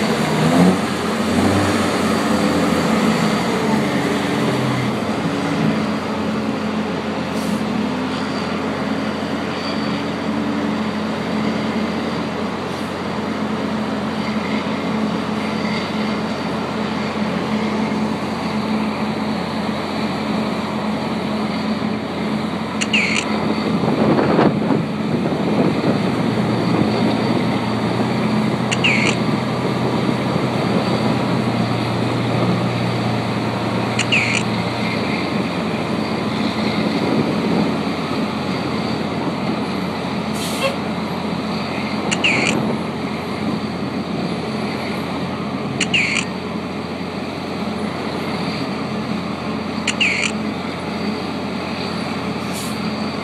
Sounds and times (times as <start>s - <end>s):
Truck: 0.0s - 53.2s.